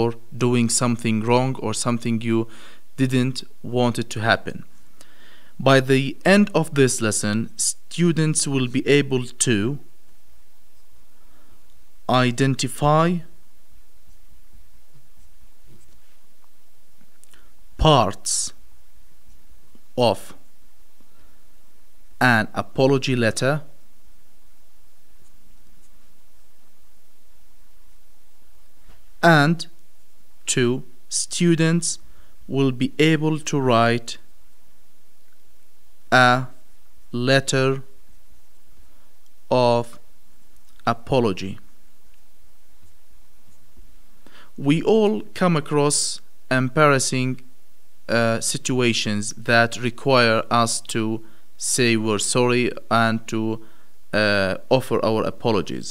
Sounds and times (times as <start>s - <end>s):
Speech: 0.0s - 4.7s, 5.6s - 9.8s, 12.1s - 13.4s, 17.8s - 18.6s, 20.0s - 20.4s, 22.2s - 23.7s, 29.2s - 29.8s, 30.5s - 34.3s, 36.1s - 37.9s, 39.5s - 40.0s, 40.8s - 41.7s, 44.6s - 47.4s, 48.1s - 53.6s, 54.2s - 55.9s.